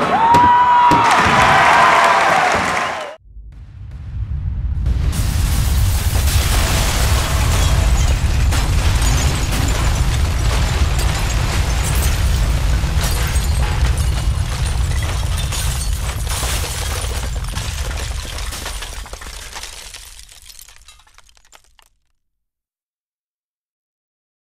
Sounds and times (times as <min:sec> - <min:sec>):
Sound effect: 0:03.2 - 0:15.3.